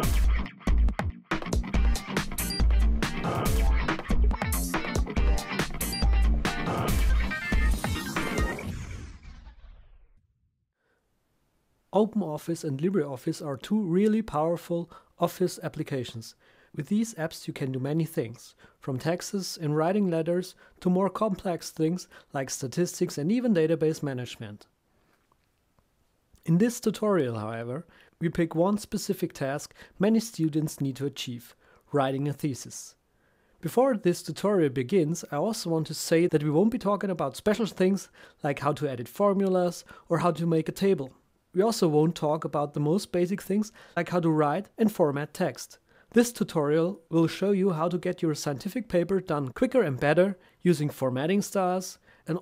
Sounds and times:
Speech: 0:11.9 - 0:24.7, 0:26.4 - 0:33.0, 0:33.6 - 0:52.4.

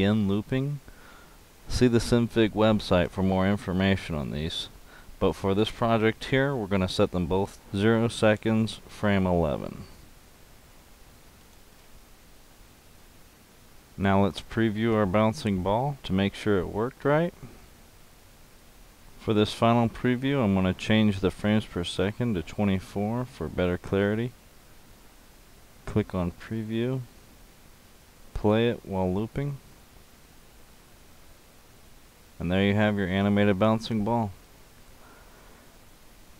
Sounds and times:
Speech: 0:00.0 - 0:00.8, 0:01.7 - 0:10.0, 0:14.0 - 0:17.5, 0:19.2 - 0:24.4, 0:25.8 - 0:27.1, 0:28.4 - 0:29.6, 0:32.4 - 0:34.4.

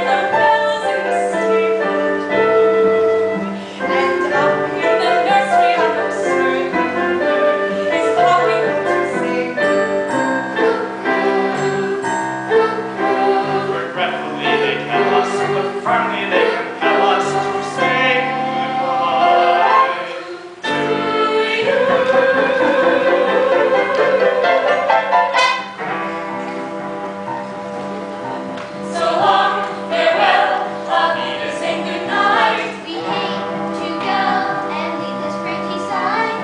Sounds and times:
Music: 0:00.0 - 0:36.4.

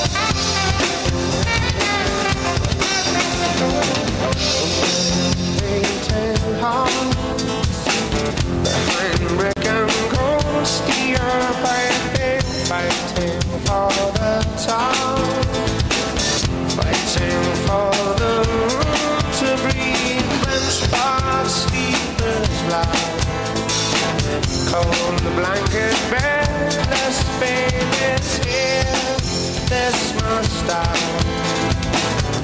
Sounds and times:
Drum: 0:00.0 - 0:32.4
Drum kit: 0:00.0 - 0:32.4.

